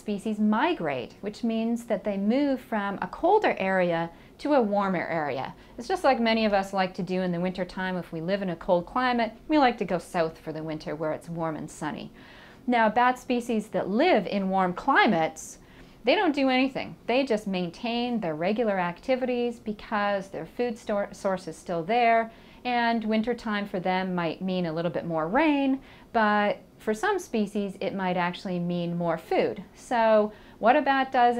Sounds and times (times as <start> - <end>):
Speech: 0.0 - 12.1, 12.7 - 31.3.